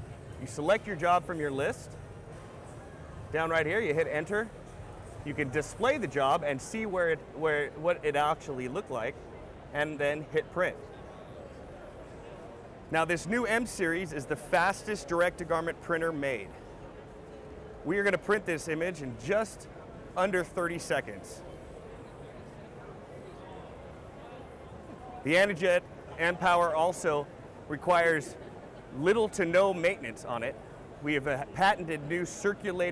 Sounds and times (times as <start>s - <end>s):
Speech: 0.0s - 1.9s, 3.3s - 4.6s, 5.2s - 16.6s, 17.8s - 32.9s.